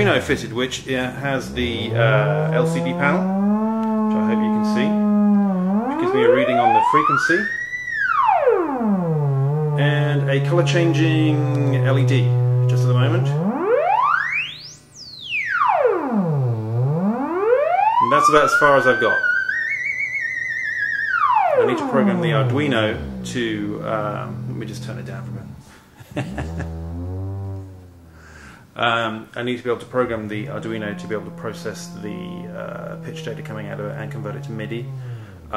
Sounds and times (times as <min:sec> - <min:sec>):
Speech: 0:00.0 - 0:03.2, 0:04.1 - 0:05.0, 0:05.9 - 0:07.5, 0:09.8 - 0:13.4, 0:18.0 - 0:19.3, 0:21.6 - 0:25.6, 0:28.8 - 0:35.5.